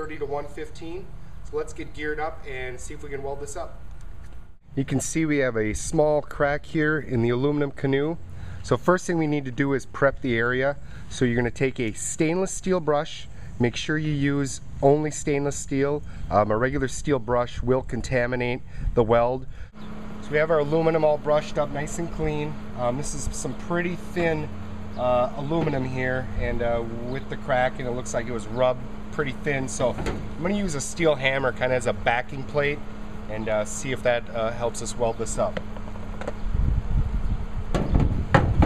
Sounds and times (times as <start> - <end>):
Speech: 0.0 - 3.8, 4.8 - 19.5, 20.2 - 35.6.